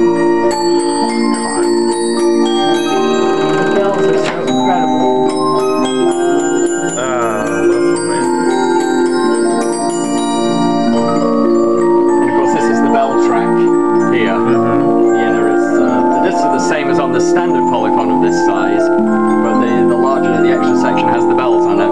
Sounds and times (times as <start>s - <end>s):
Speech: 3.6s - 5.1s, 7.0s - 8.3s, 12.2s - 21.9s.